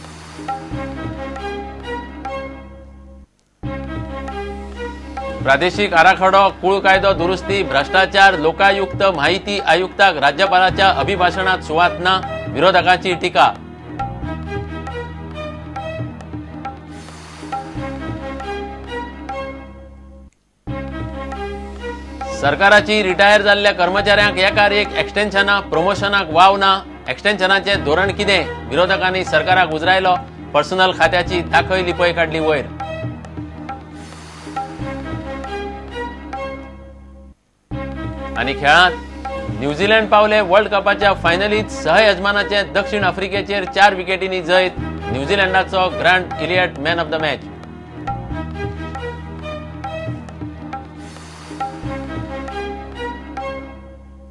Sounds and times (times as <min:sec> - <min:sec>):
Music: 0:00.0 - 0:54.3
Speech: 0:05.5 - 0:13.6, 0:22.4 - 0:32.7, 0:38.4 - 0:39.0, 0:39.6 - 0:47.4.